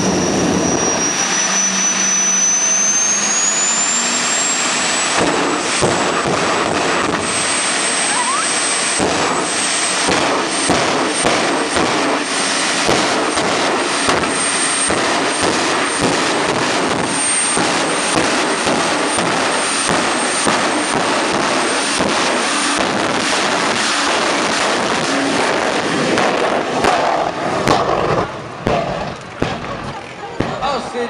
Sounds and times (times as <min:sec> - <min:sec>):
Speech: 0:29.9 - 0:31.1.